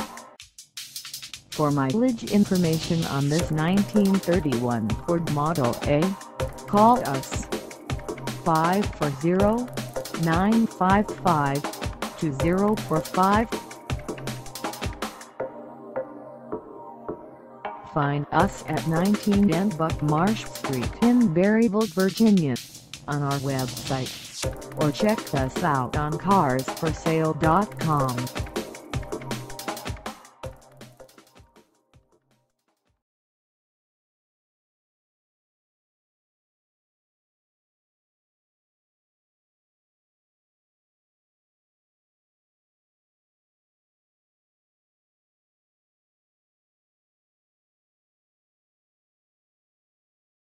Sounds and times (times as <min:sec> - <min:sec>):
Music: 0:00.0 - 0:33.0
Speech: 0:01.6 - 0:07.5, 0:08.5 - 0:11.6, 0:12.2 - 0:13.5, 0:17.9 - 0:24.1, 0:24.8 - 0:28.3.